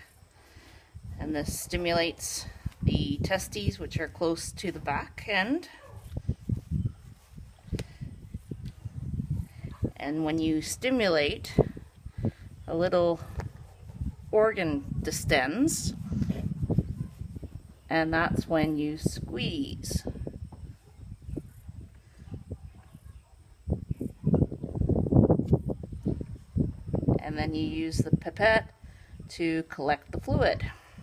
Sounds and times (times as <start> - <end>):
Speech: 1.2 - 5.7, 10.0 - 11.6, 14.4 - 16.0, 17.9 - 20.1, 27.2 - 28.7, 29.3 - 30.8.